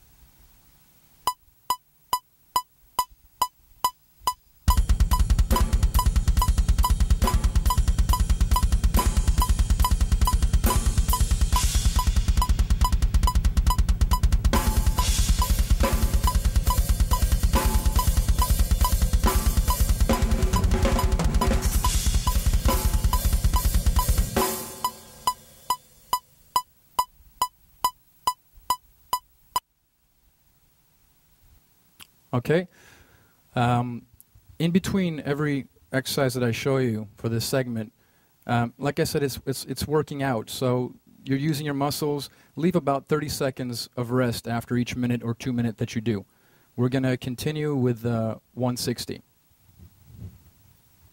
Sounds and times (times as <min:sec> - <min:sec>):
Bass drum: 0:04.7 - 0:25.4
Rimshot: 0:04.7 - 0:25.4
Drum roll: 0:04.7 - 0:26.1
Drum kit: 0:04.7 - 0:26.2.